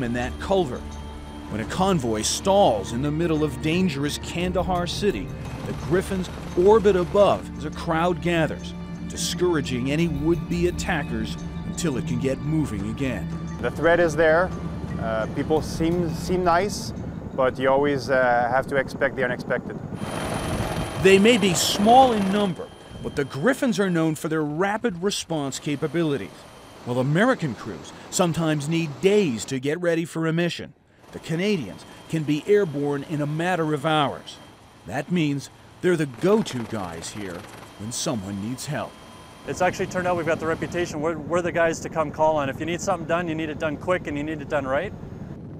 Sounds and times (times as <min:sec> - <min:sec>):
Speech: 0:00.0 - 0:00.8, 0:01.6 - 0:19.8, 0:21.0 - 0:26.3, 0:26.9 - 0:38.9, 0:39.5 - 0:44.9
Helicopter: 0:00.0 - 0:29.5, 0:30.8 - 0:45.5.